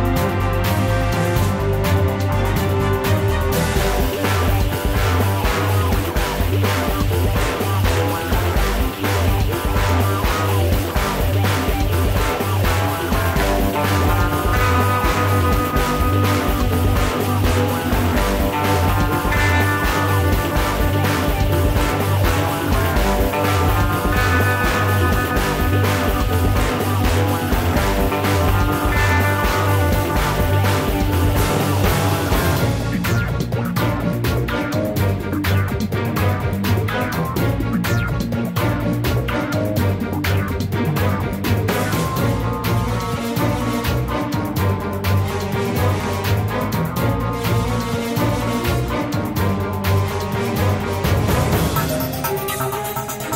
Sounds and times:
Music: 0:00.0 - 0:53.3.

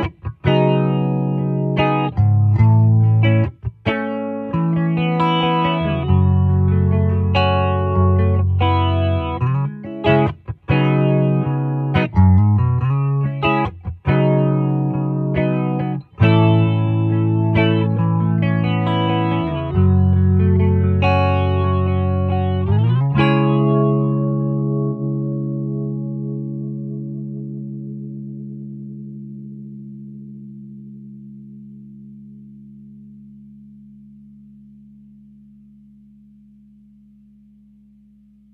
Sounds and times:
Bass guitar: 0:00.0 - 0:38.5.

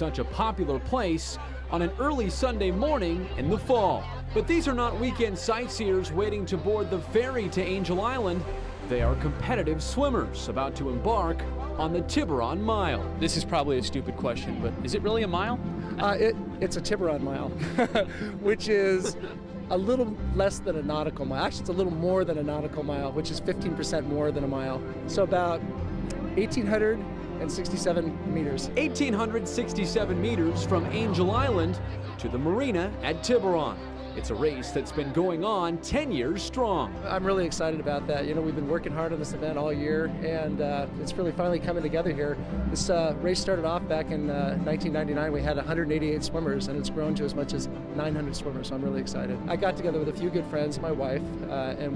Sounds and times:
Speech: 0:00.0 - 0:17.6, 0:18.3 - 0:25.6, 0:26.2 - 0:51.9
Music: 0:00.0 - 0:51.9.

